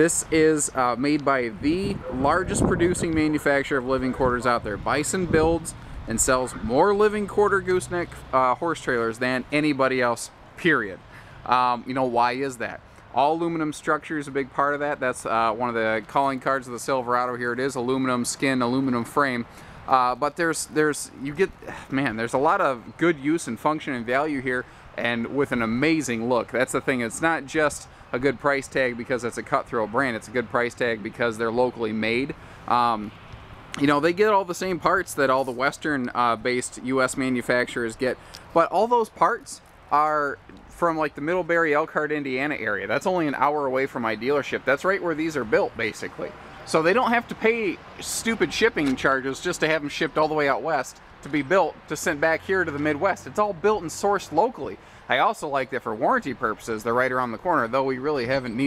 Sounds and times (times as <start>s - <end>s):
Speech: 0.0s - 33.2s, 33.8s - 58.6s.